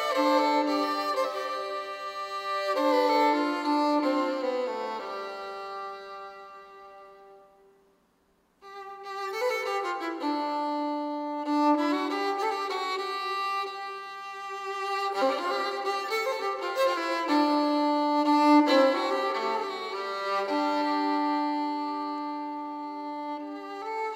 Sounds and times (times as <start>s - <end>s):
Music: 0.0s - 7.8s, 8.6s - 24.1s.